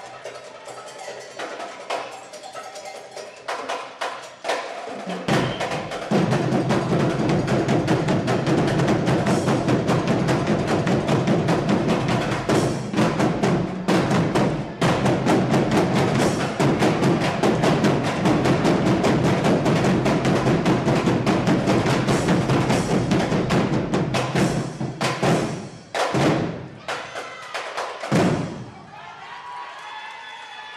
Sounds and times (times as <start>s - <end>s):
Music: 0.0s - 28.7s.